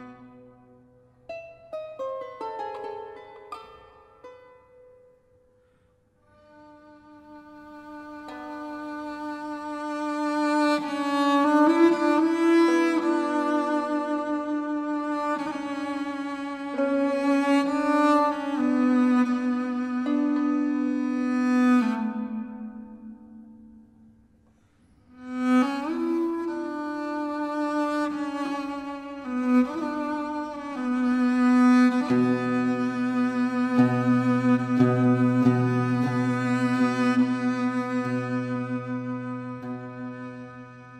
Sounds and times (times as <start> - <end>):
Music: 0.0 - 41.0.